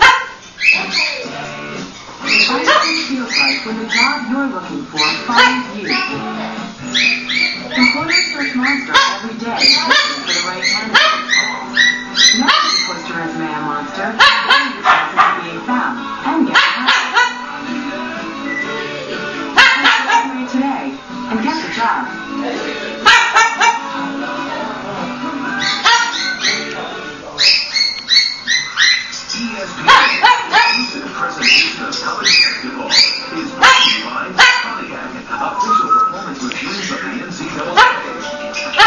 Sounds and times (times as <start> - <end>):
Bow-wow: 0.0 - 0.4, 5.0 - 5.7, 8.7 - 9.2, 9.8 - 12.9, 14.2 - 15.4, 16.5 - 17.4, 19.6 - 20.3, 23.0 - 23.9, 25.7 - 26.6, 29.9 - 30.9, 33.6 - 34.7, 37.8 - 38.1
Music: 0.0 - 38.8.